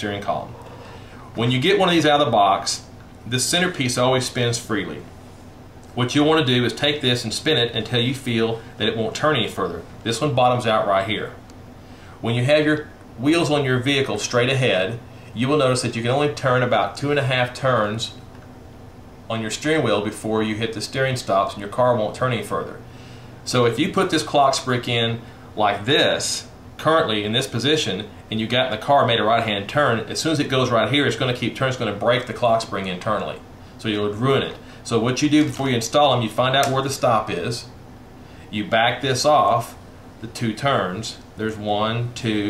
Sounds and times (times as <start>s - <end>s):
Speech: 0.0s - 0.6s, 1.4s - 5.1s, 6.0s - 11.4s, 12.2s - 18.2s, 19.3s - 22.8s, 23.4s - 37.8s, 38.5s - 42.4s.